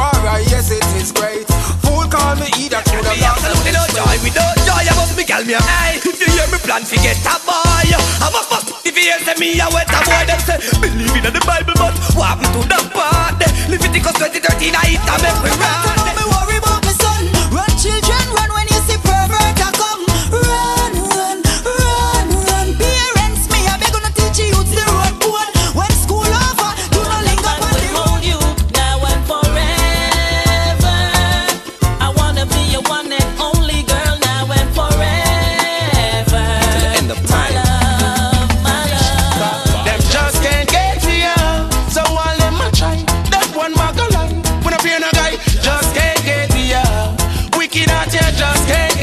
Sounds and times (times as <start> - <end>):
Male singing: 0.0 - 49.0
Music: 0.0 - 49.0.